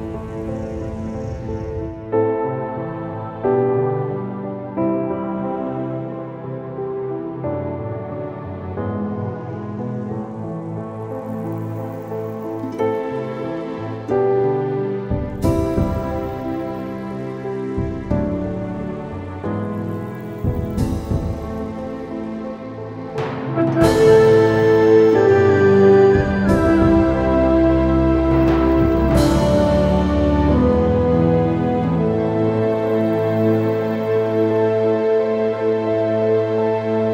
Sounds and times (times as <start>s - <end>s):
New-age music: 0.0s - 37.1s.